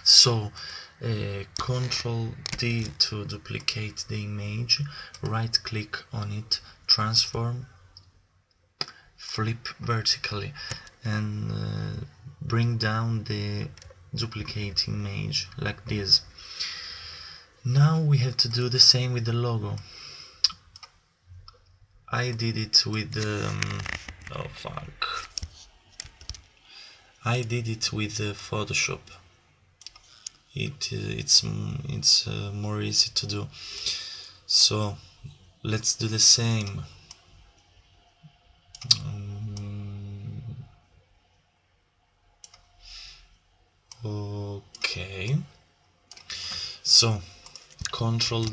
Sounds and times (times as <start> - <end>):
Speech: 0.0 - 7.8, 9.2 - 16.3, 17.6 - 19.9, 22.1 - 25.4, 27.2 - 29.2, 30.5 - 33.6, 34.5 - 37.0, 38.8 - 40.8, 44.0 - 45.6, 46.8 - 48.5
Inside, small room: 0.0 - 48.5.